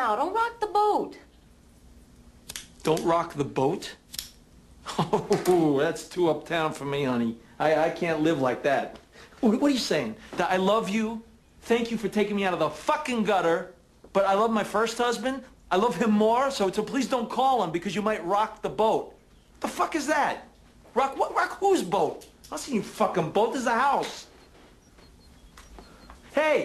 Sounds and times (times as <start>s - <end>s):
Speech: 5.3s - 24.3s, 26.4s - 26.6s.